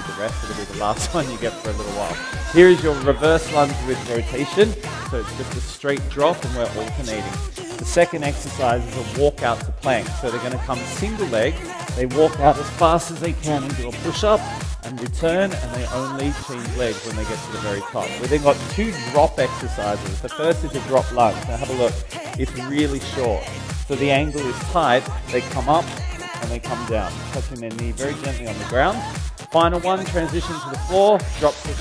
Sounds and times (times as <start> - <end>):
Music: 0.0 - 31.8
Speech: 0.0 - 31.8.